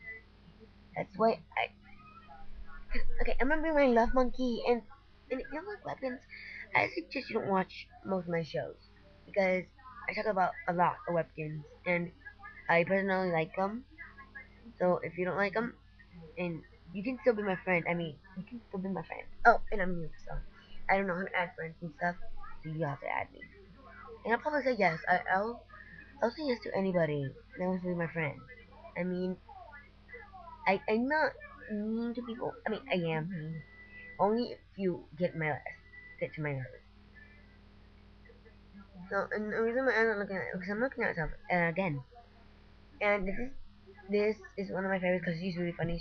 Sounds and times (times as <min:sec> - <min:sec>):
Child speech, kid speaking: 0:01.0 - 0:08.7, 0:09.3 - 0:14.2, 0:14.8 - 0:15.7, 0:16.4 - 0:23.4, 0:24.1 - 0:33.6, 0:39.1 - 0:42.0, 0:43.0 - 0:46.0.